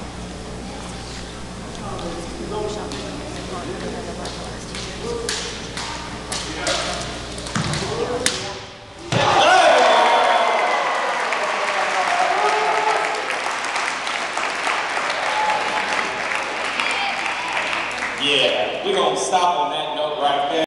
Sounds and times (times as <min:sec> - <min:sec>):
Speech: 0:18.2 - 0:20.6.